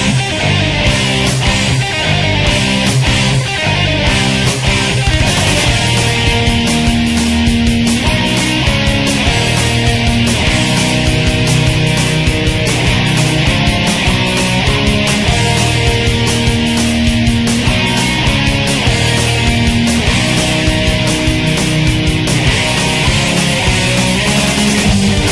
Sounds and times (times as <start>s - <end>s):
Music: 0.0s - 25.3s.